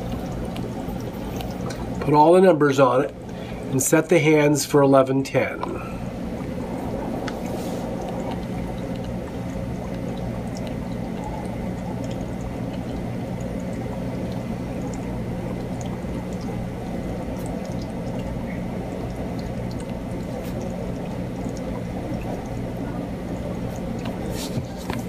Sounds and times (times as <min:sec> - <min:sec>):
Speech: 0:02.0 - 0:03.1, 0:03.8 - 0:05.8.